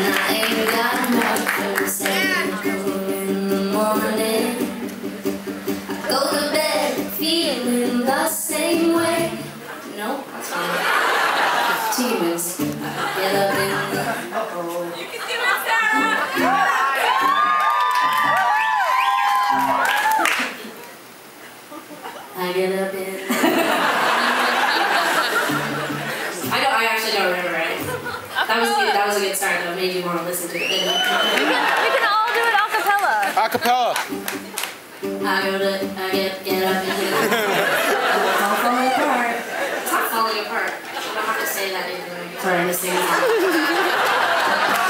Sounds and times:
Music: 0.0s - 9.6s, 12.4s - 14.2s, 15.9s - 18.5s, 25.4s - 26.8s, 34.0s - 37.2s.

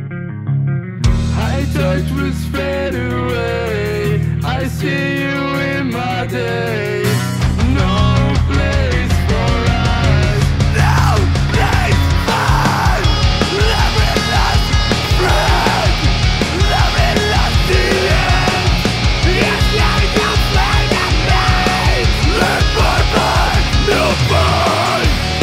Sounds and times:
Soul music: 0.2s - 25.4s.

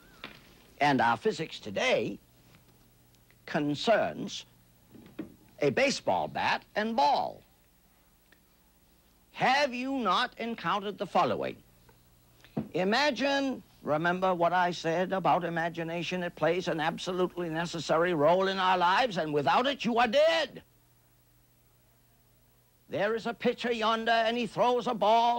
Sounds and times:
Speech: 0.8s - 2.2s, 3.4s - 4.5s, 5.6s - 7.5s, 9.4s - 11.6s, 12.7s - 20.7s, 22.9s - 25.3s.

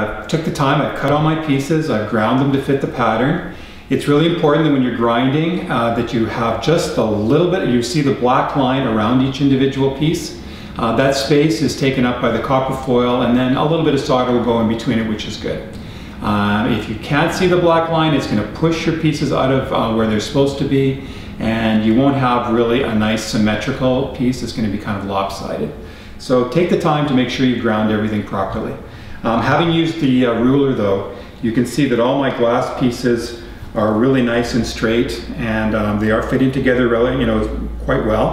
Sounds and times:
Speech: 0.0s - 38.3s.

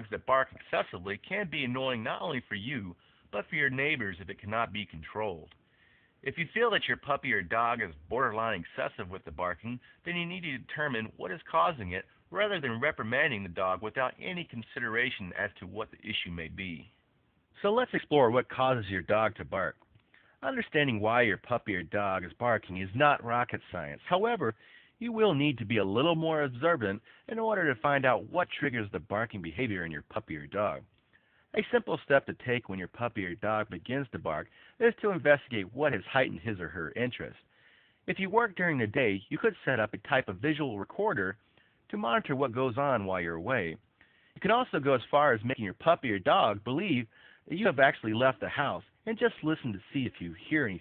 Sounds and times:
Speech: 0.0s - 5.6s, 6.2s - 17.0s, 17.6s - 19.8s, 20.4s - 30.9s, 31.5s - 43.8s, 44.4s - 50.8s.

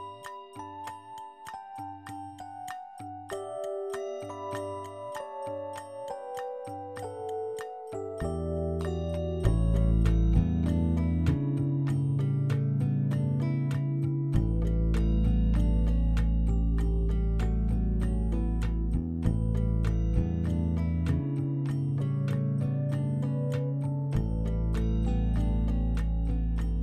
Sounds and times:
Glass: 0.0s - 26.8s.

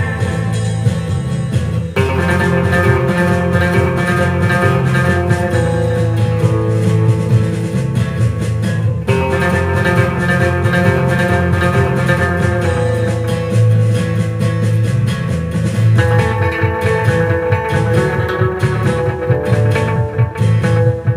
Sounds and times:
Guitar: 0.0s - 21.1s.

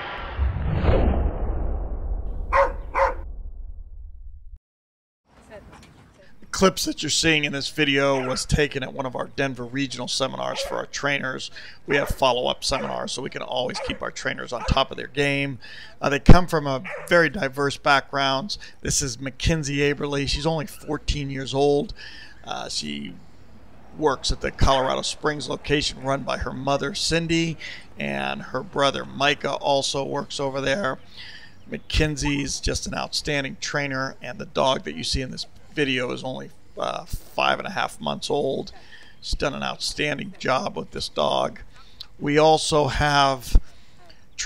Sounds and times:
Speech: 5.4s - 23.2s, 24.0s - 31.0s, 31.7s - 43.6s.

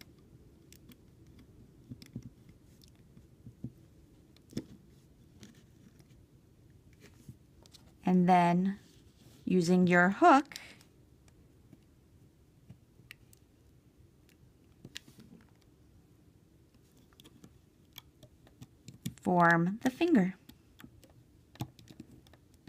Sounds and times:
Inside, small room: 0.0s - 22.6s
Speech: 9.5s - 10.7s, 19.2s - 20.4s.

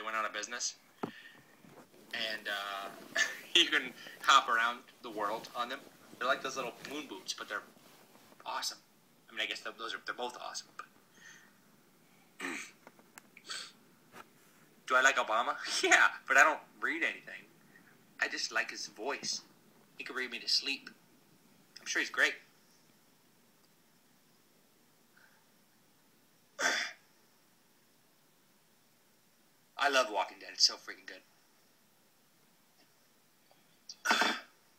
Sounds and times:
Speech: 0.0s - 0.8s, 2.1s - 7.7s, 8.4s - 10.9s, 14.9s - 17.5s, 18.2s - 21.0s, 21.8s - 22.4s, 29.8s - 31.3s
Inside, small room: 0.0s - 34.7s.

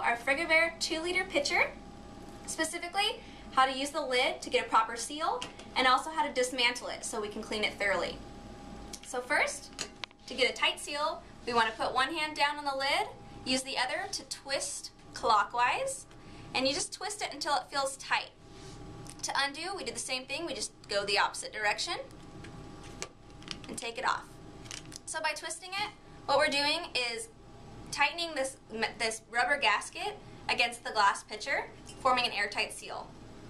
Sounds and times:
Speech: 0.0s - 1.8s, 2.5s - 8.2s, 9.0s - 9.7s, 10.3s - 18.3s, 19.2s - 22.1s, 23.7s - 24.3s, 25.1s - 27.3s, 27.9s - 33.1s.

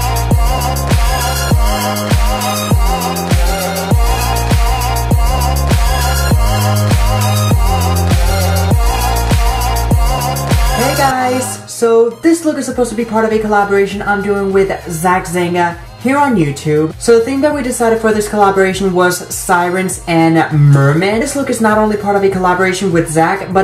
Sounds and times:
Music: 0.0s - 23.6s
Speech: 10.8s - 23.6s.

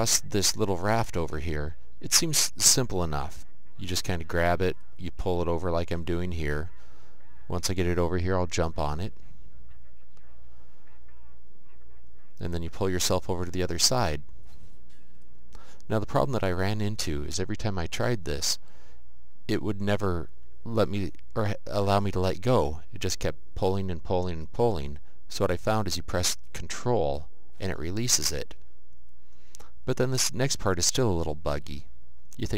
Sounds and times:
Speech: 0.0s - 14.2s, 15.9s - 18.6s, 19.5s - 28.6s, 29.9s - 32.5s.

